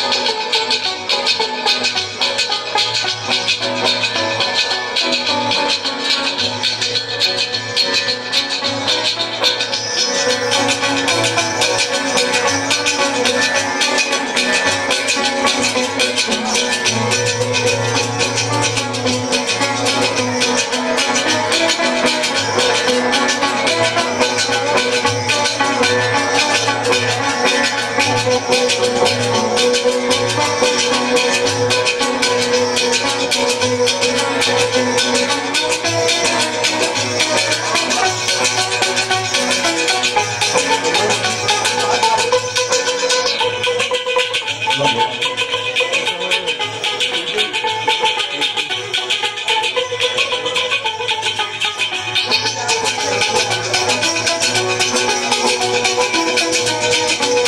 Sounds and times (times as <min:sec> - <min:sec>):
Maraca: 0:00.0 - 0:57.4.